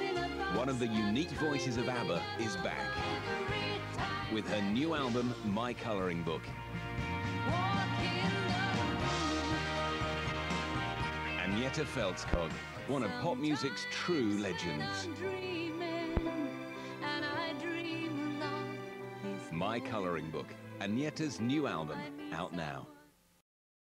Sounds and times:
Music: 0.0 - 23.4
Speech: 0.5 - 2.9, 4.3 - 6.5, 11.4 - 15.1, 19.5 - 22.9.

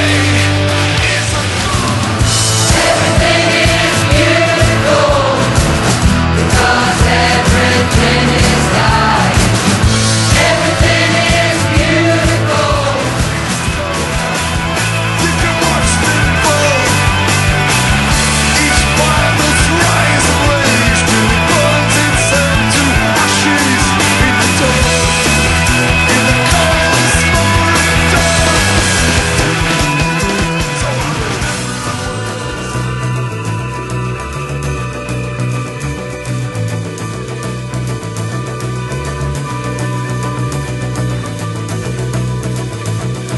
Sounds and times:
Music: 0.0 - 43.3.

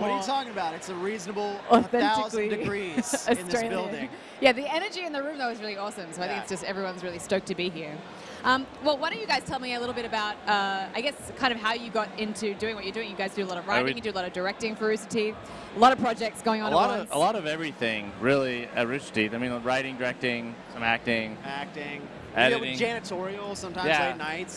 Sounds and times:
Speech: 0.0 - 4.7, 13.1 - 14.1.

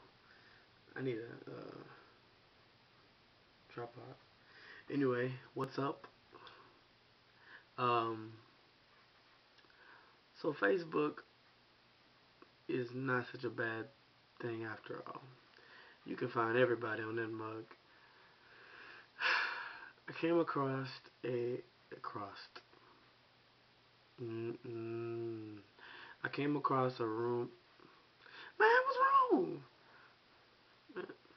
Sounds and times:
Speech: 0.9 - 2.0, 3.7 - 4.2, 4.9 - 6.1, 7.8 - 8.4, 10.4 - 11.3, 12.7 - 15.4, 16.0 - 17.8, 20.1 - 22.6, 24.2 - 27.6, 28.6 - 29.7.

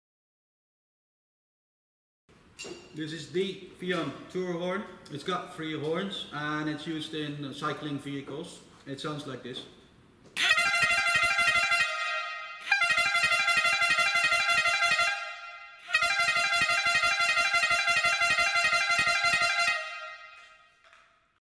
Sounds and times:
Air horn, truck horn: 10.4 - 20.8.

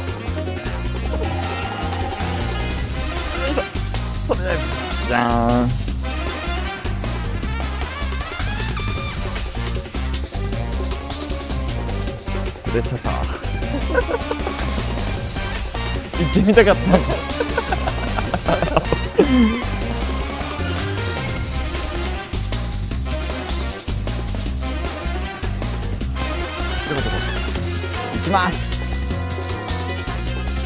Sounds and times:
Music: 0.0 - 30.6
Speech: 4.3 - 5.8, 12.7 - 13.3, 16.2 - 17.2, 28.1 - 28.7.

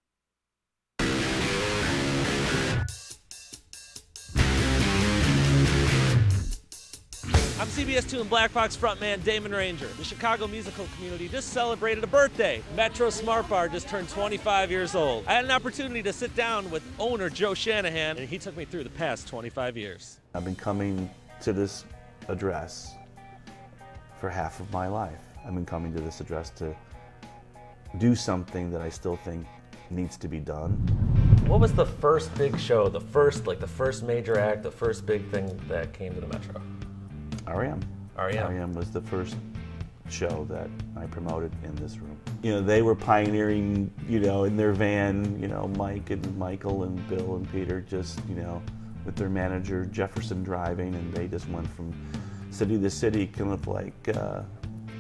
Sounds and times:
Music: 1.0 - 55.0
Speech: 7.6 - 23.0, 24.2 - 26.8, 28.0 - 30.8, 31.5 - 36.6, 37.5 - 39.4, 40.1 - 54.5.

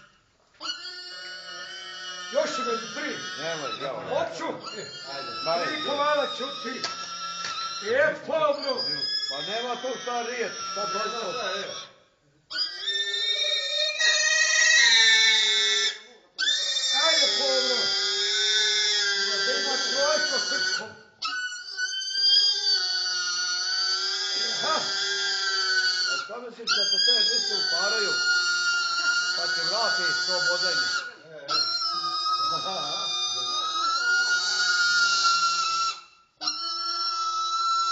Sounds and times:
Pig: 0.0 - 37.9.

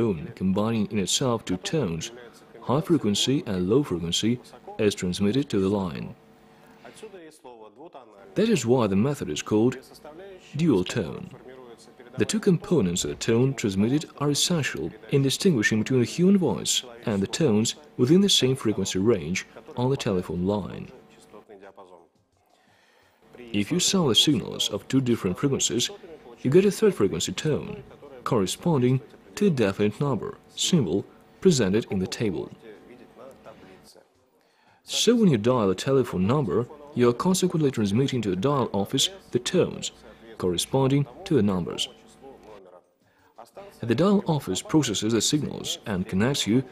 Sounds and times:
Speech: 0.0 - 6.2, 6.8 - 22.1, 23.3 - 46.7.

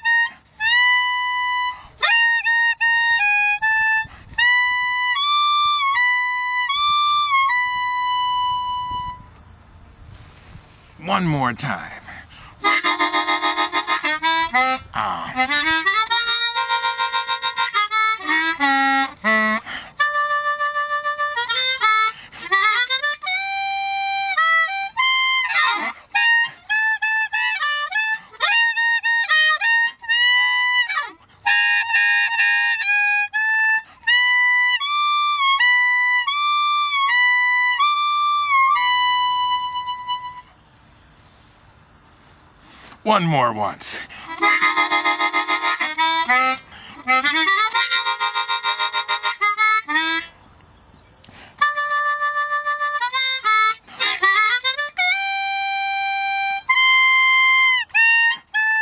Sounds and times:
Harmonica: 0.0 - 9.4, 12.0 - 43.1, 43.8 - 50.4, 51.2 - 58.8.

